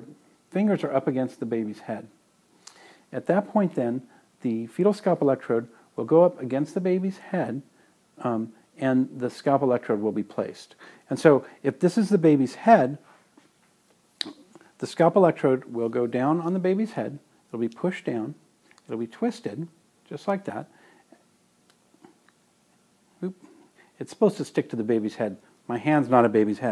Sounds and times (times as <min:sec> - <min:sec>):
Speech: 0:00.0 - 0:02.2, 0:03.1 - 0:13.0, 0:14.2 - 0:20.7, 0:23.2 - 0:26.7.